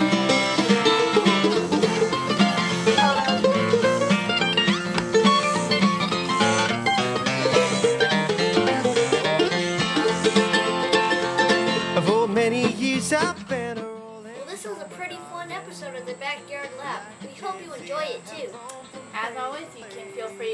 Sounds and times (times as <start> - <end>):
Banjo: 0.0 - 20.5
Bluegrass: 0.0 - 20.5.